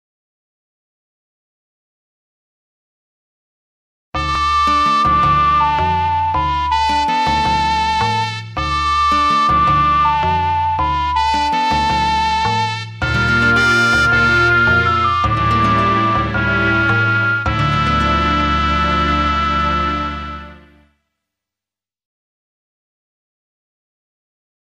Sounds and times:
Music: 0:04.2 - 0:21.3.

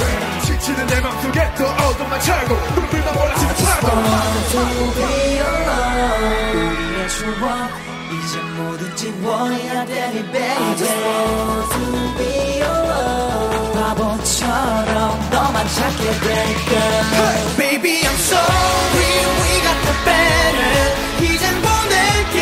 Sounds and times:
Music of Asia: 0:00.0 - 0:22.4
Singing: 0:00.0 - 0:22.4.

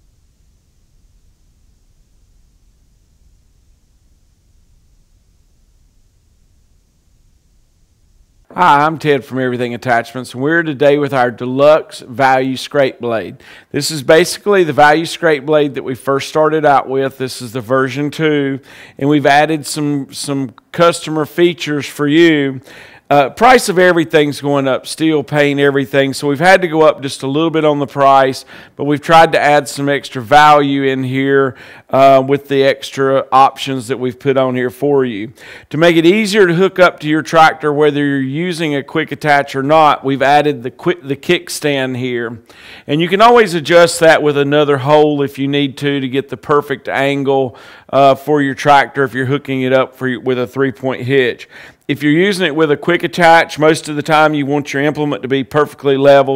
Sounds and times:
Speech: 0:08.5 - 0:56.3.

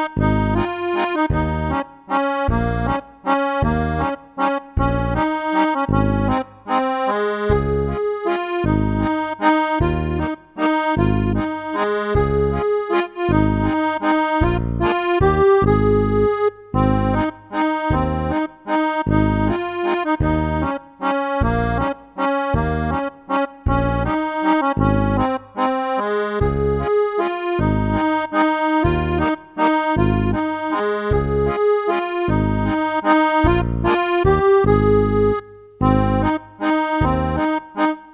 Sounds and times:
Music: 0:00.0 - 0:38.1.

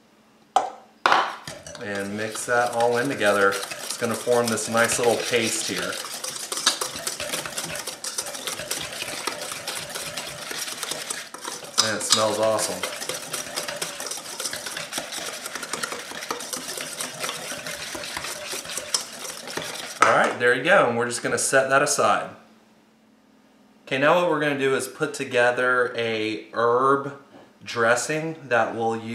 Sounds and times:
Stir: 0:01.3 - 0:20.4.

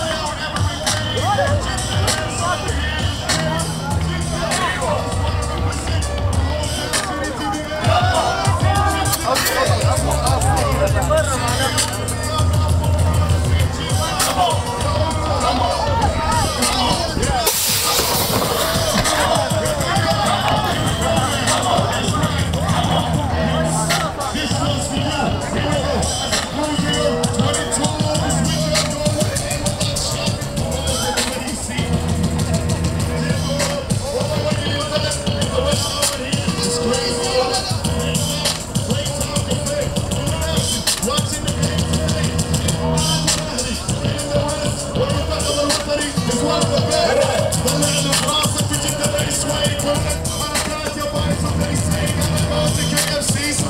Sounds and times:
Speech: 0:00.0 - 0:32.1
Music: 0:00.0 - 0:53.6.

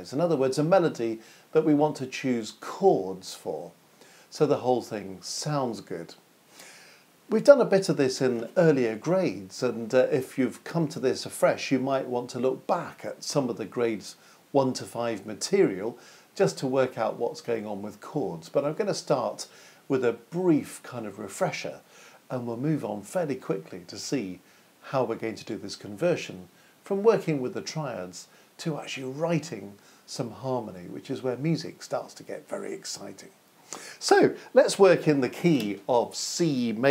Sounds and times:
Speech: 0:00.0 - 0:06.2, 0:07.3 - 0:33.4, 0:34.0 - 0:36.9.

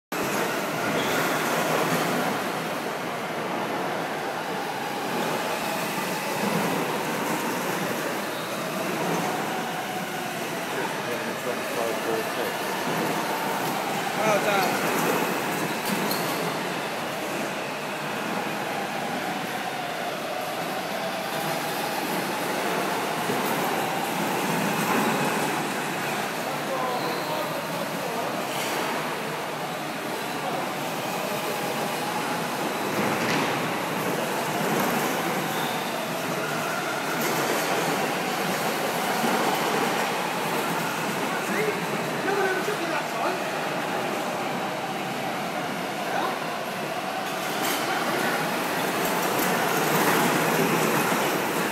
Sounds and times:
Race car, auto racing: 0:00.9 - 0:01.7.

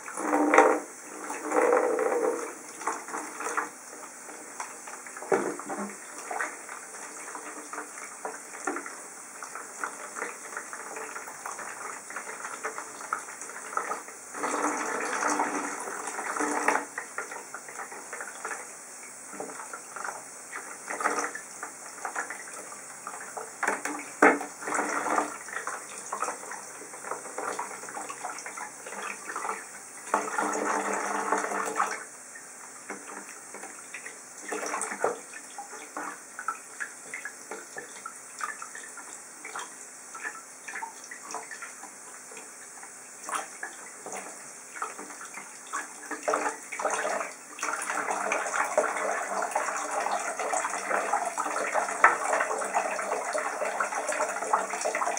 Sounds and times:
Sink (filling or washing): 0:00.0 - 0:55.1
Water: 0:00.0 - 0:55.1.

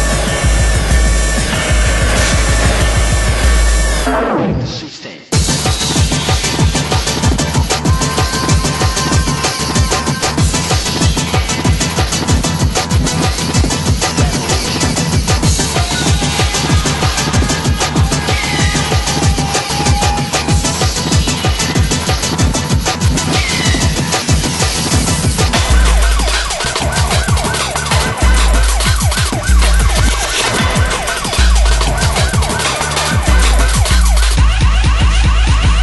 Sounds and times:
Disco: 0:00.0 - 0:35.8
Techno: 0:00.0 - 0:35.8.

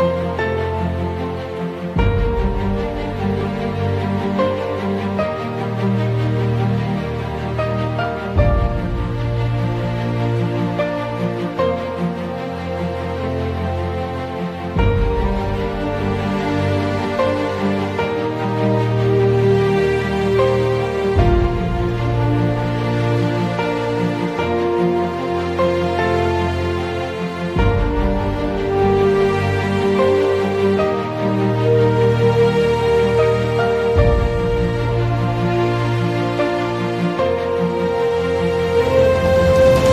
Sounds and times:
Music: 0:00.0 - 0:39.9.

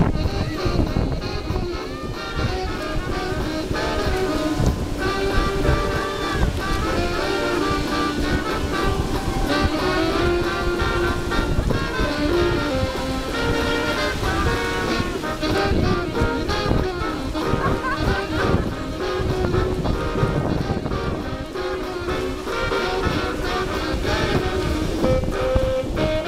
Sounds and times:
Music: 0:00.0 - 0:26.2
Outside, rural or natural: 0:00.0 - 0:26.2.

